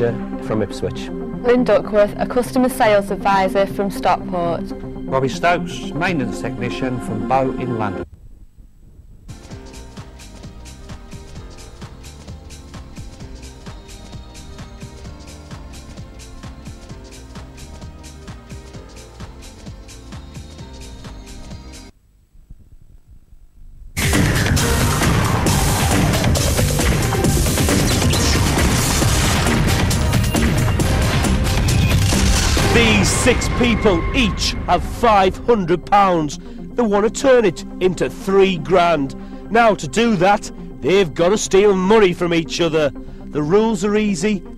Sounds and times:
Speech: 0:00.0 - 0:08.0, 0:32.7 - 0:44.4
Music: 0:00.0 - 0:08.1, 0:09.3 - 0:22.0, 0:24.0 - 0:44.5.

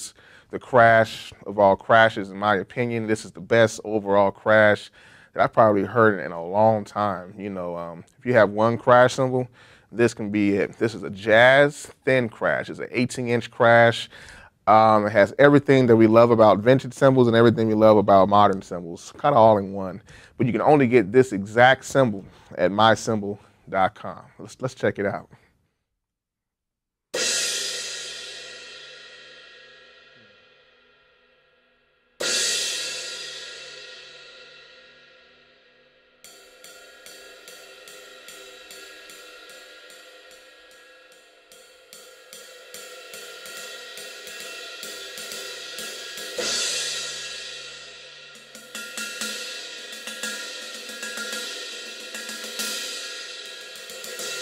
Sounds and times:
Speech: 0:00.0 - 0:14.1, 0:14.7 - 0:25.4.

